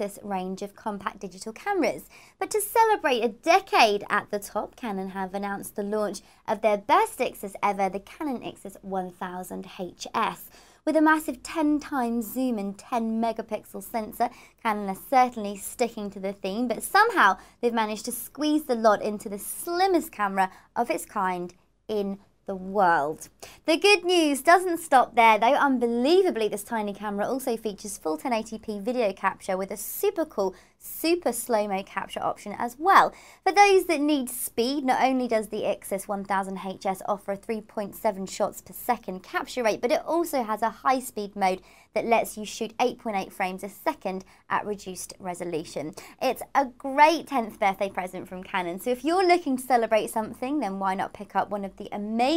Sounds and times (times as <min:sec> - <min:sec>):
Speech: 0:00.0 - 0:52.3.